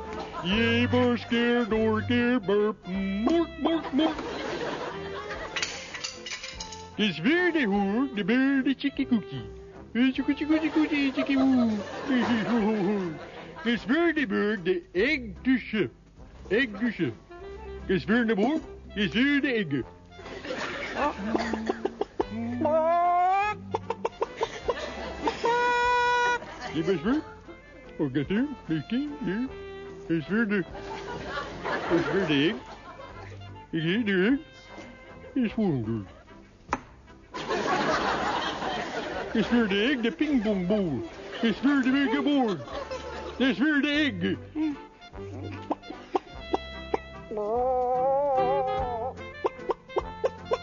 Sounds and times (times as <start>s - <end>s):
Music: 0.0s - 50.6s
Speech: 0.5s - 4.2s, 7.0s - 17.2s, 17.9s - 19.9s, 33.8s - 34.5s, 35.4s - 36.2s, 39.4s - 42.7s, 43.4s - 44.4s.